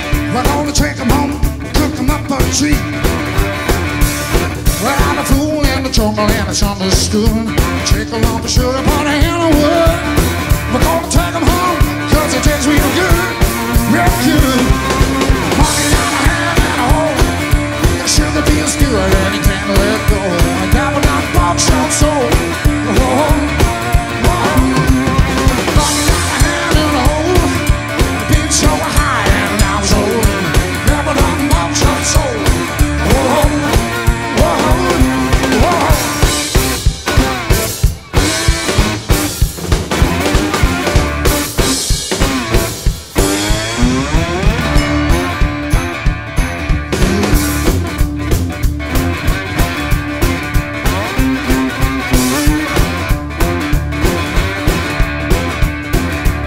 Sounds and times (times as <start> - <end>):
Music: 0.0 - 56.4.